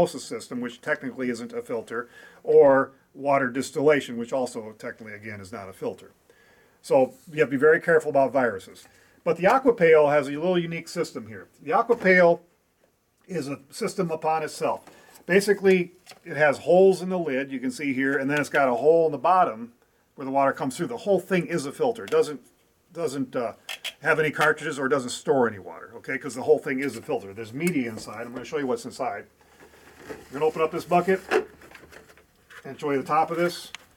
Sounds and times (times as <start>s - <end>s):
Speech: 0.0s - 6.2s, 6.8s - 12.5s, 13.3s - 29.3s, 30.3s - 31.4s, 32.6s - 33.8s.